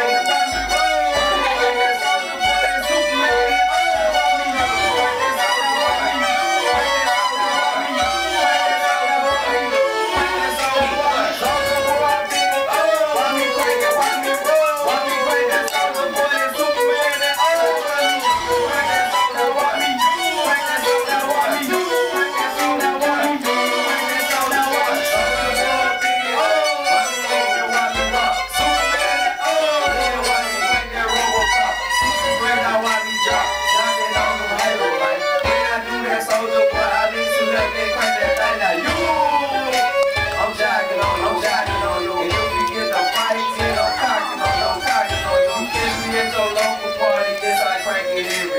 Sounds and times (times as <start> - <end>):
Violin, fiddle: 0.0 - 48.5.